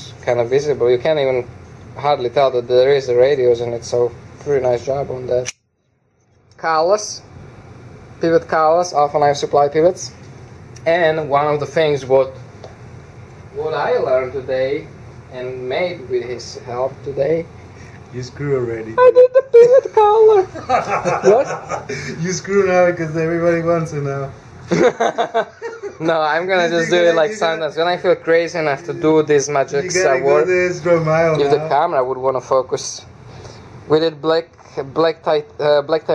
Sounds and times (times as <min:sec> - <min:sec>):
Speech: 0:00.0 - 0:05.5, 0:06.6 - 0:07.3, 0:08.2 - 0:10.2, 0:10.8 - 0:12.4, 0:22.1 - 0:24.3, 0:26.0 - 0:33.1, 0:33.9 - 0:36.1
Inside, small room: 0:00.0 - 0:36.1.